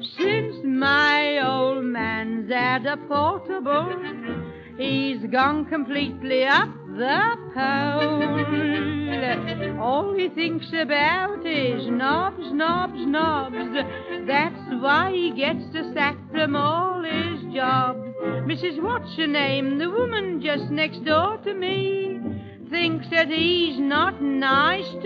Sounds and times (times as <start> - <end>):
Speech: 0.0 - 3.9, 4.8 - 13.6, 14.3 - 25.0
Music: 0.0 - 25.0.